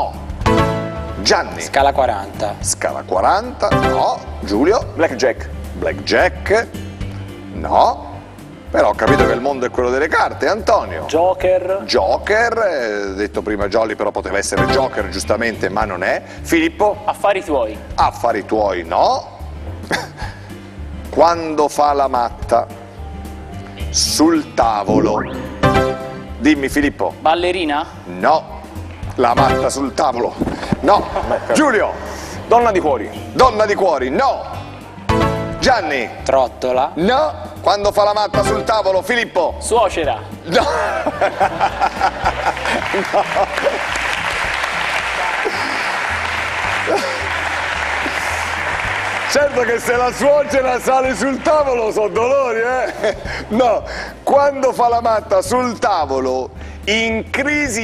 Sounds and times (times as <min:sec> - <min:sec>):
Music: 0:00.0 - 0:57.8.